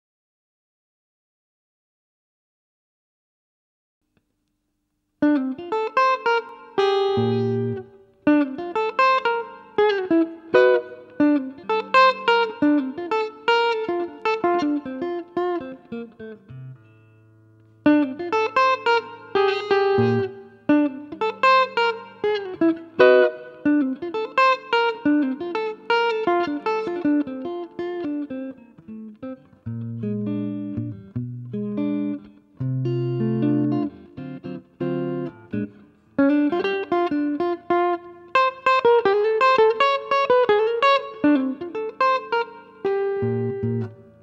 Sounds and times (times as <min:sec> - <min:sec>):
Electric guitar: 0:05.2 - 0:44.2.